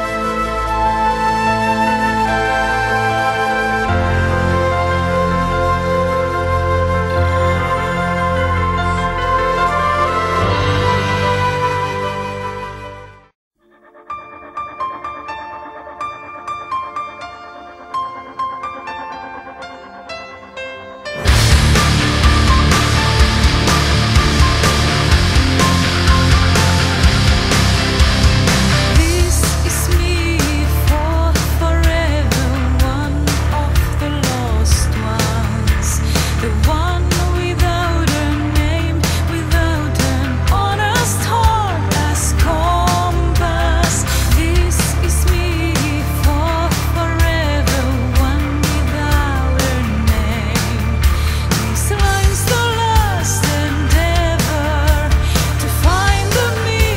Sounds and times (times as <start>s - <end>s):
Music: 0.0s - 56.9s.